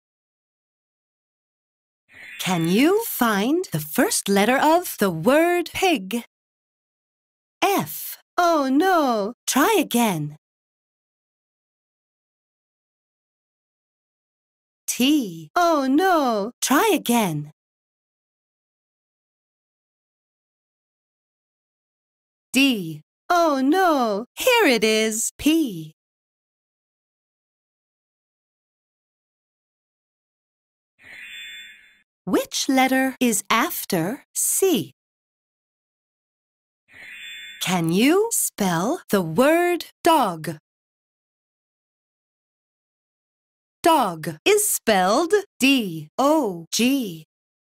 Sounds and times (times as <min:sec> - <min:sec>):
Speech: 0:02.4 - 0:06.3, 0:07.6 - 0:10.4, 0:14.9 - 0:17.6, 0:22.6 - 0:26.0, 0:32.3 - 0:35.0, 0:37.6 - 0:40.6, 0:43.8 - 0:47.3.